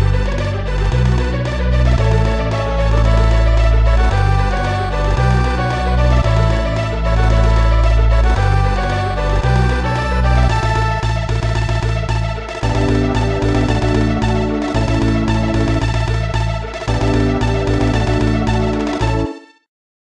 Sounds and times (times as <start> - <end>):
Music: 0.0 - 19.7.